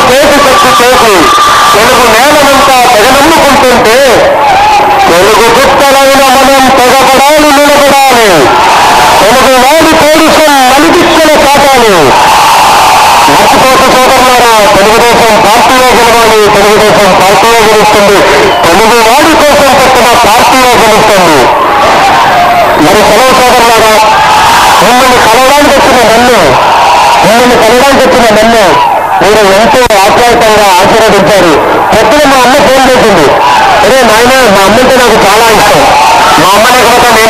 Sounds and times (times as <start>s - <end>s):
Male speech, man speaking: 0.0s - 4.3s, 5.1s - 8.5s, 9.2s - 12.2s, 13.2s - 21.5s, 22.8s - 24.1s, 24.7s - 26.6s, 27.2s - 37.2s
Narration, monologue: 0.0s - 4.4s, 5.0s - 8.6s, 9.2s - 12.2s, 13.3s - 21.6s, 22.7s - 24.2s, 24.8s - 26.6s, 27.2s - 37.2s.